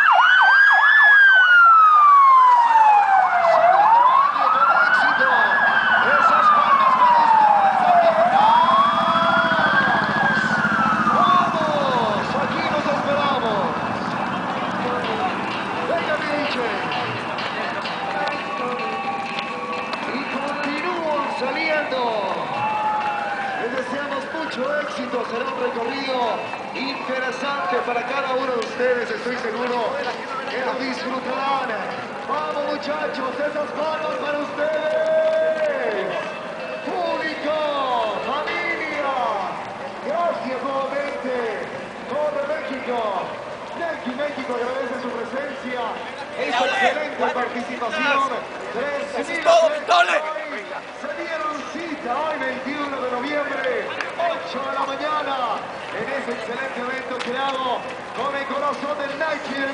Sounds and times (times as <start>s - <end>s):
Outside, urban or manmade: 0.0s - 59.7s
Run: 0.0s - 59.7s
Music: 14.4s - 23.6s.